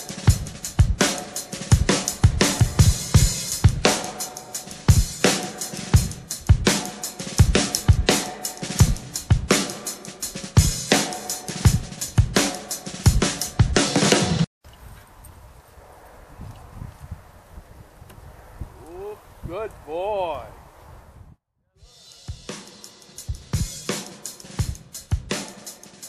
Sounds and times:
Music: 0:00.0 - 0:14.5, 0:21.7 - 0:26.0.

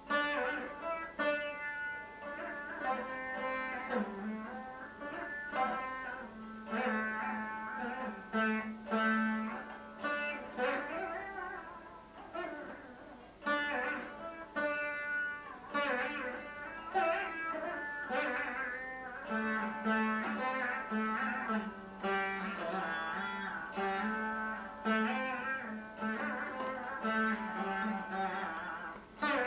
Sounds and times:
Plucked string instrument: 0:00.0 - 0:29.4.

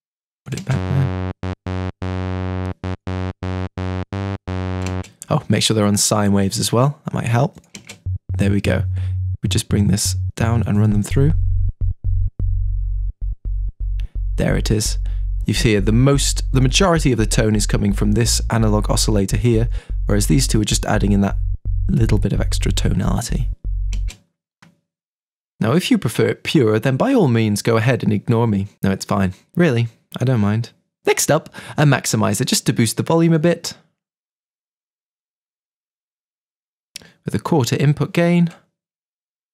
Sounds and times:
Speech: 0:00.5 - 0:01.1, 0:05.2 - 0:07.6, 0:08.4 - 0:11.4, 0:14.4 - 0:23.5, 0:25.6 - 0:33.8, 0:37.0 - 0:38.6.

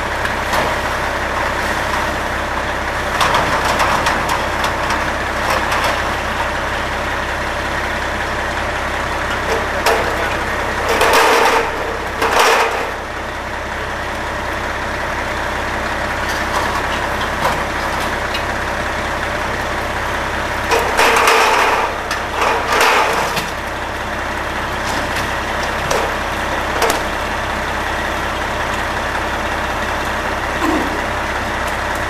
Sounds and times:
Vehicle: 0:00.0 - 0:32.1
Speech: 0:09.5 - 0:10.8.

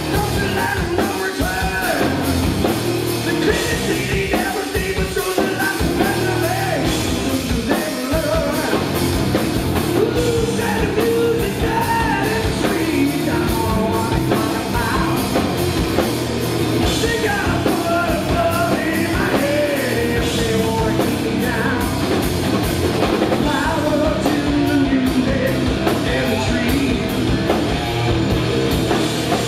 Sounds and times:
Music: 0:00.0 - 0:29.4.

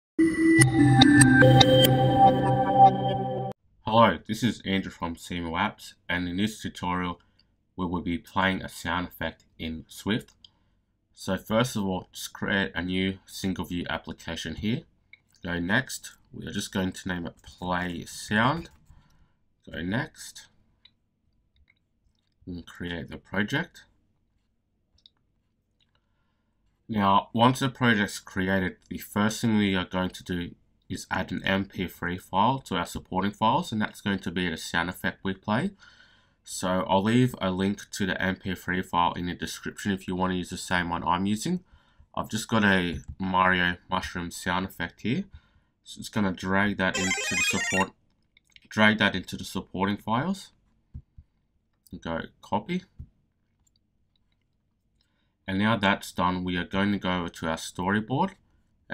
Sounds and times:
Music: 0:00.2 - 0:03.6, 0:46.9 - 0:47.9
Speech: 0:03.8 - 0:07.2, 0:07.8 - 0:10.4, 0:11.2 - 0:18.8, 0:19.6 - 0:20.6, 0:22.4 - 0:23.9, 0:26.9 - 0:35.8, 0:36.4 - 0:47.9, 0:48.5 - 0:50.6, 0:51.9 - 0:53.0, 0:55.5 - 0:58.9.

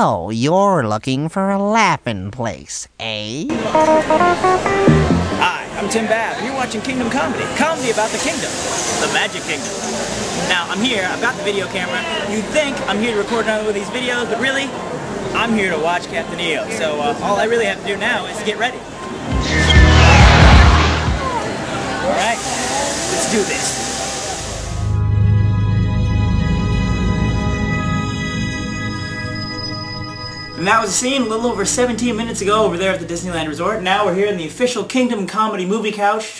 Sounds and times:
Speech: 0:00.0 - 0:03.7, 0:05.4 - 0:18.8, 0:22.0 - 0:23.9, 0:30.6 - 0:36.3
Scary music: 0:19.2 - 0:22.1, 0:24.8 - 0:32.4.

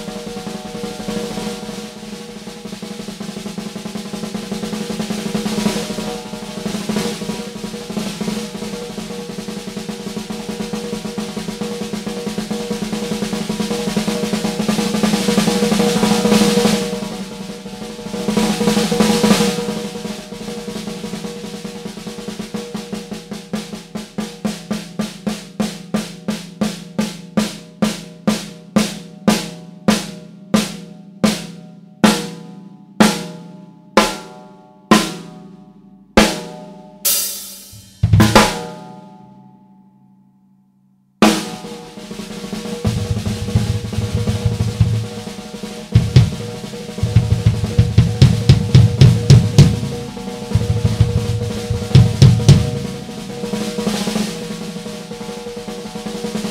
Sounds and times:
Drum kit: 0:00.0 - 0:39.4, 0:41.2 - 0:56.5
Drum roll: 0:00.0 - 0:39.5, 0:41.2 - 0:56.5
Rimshot: 0:36.2 - 0:39.2, 0:41.2 - 0:55.3
Bass drum: 0:37.6 - 0:38.8, 0:42.8 - 0:53.5.

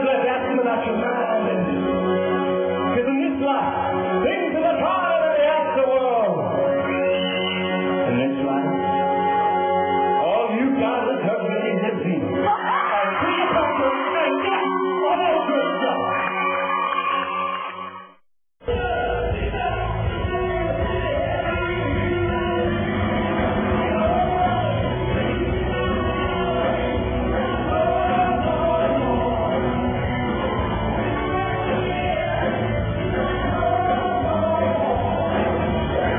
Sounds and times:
Music: 0:00.0 - 0:36.1.

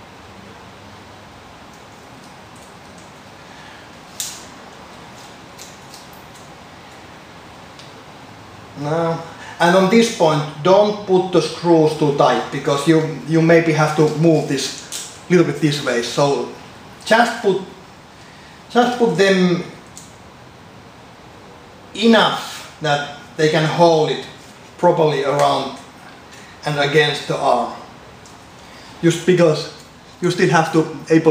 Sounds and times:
Inside, small room: 0:00.0 - 0:31.3
Speech: 0:08.8 - 0:17.8, 0:18.7 - 0:19.8, 0:22.0 - 0:25.9, 0:26.6 - 0:27.9, 0:29.0 - 0:31.3.

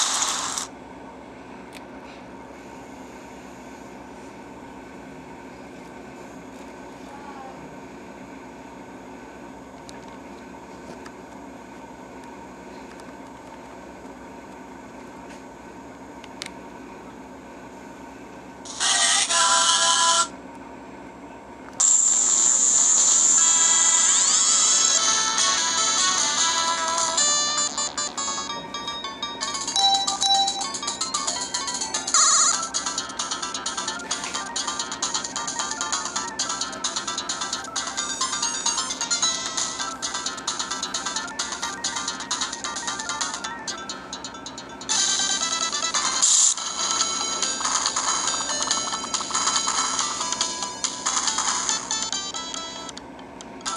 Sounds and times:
Speech: 0:07.0 - 0:07.9.

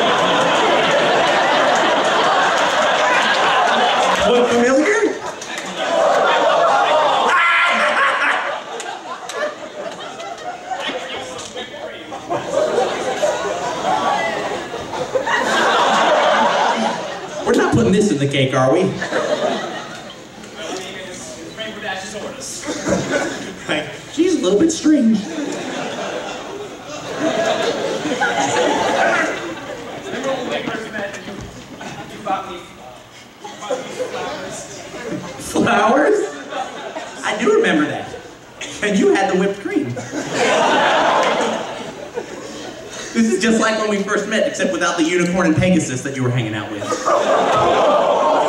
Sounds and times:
Inside, large room or hall: 0:00.0 - 0:48.4
Speech: 0:17.4 - 0:19.0, 0:20.6 - 0:22.8, 0:33.6 - 0:36.4, 0:37.2 - 0:40.0, 0:43.2 - 0:47.0.

